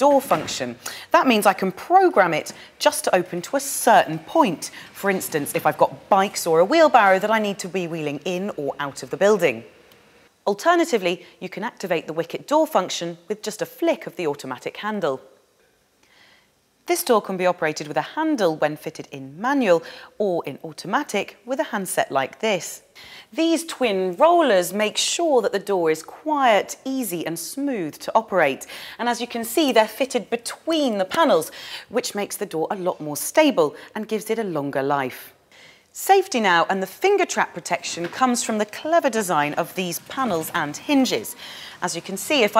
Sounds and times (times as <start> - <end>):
Speech: 0.0 - 9.7, 10.5 - 15.3, 16.9 - 35.3, 36.0 - 42.5.